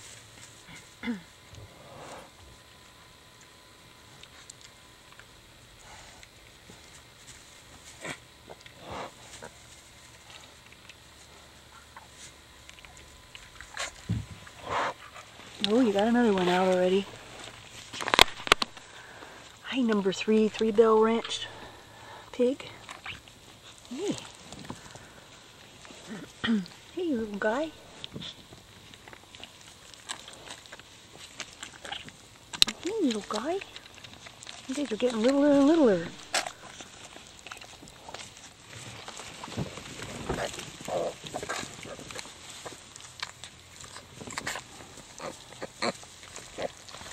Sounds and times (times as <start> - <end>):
Patter: 0.0 - 47.1.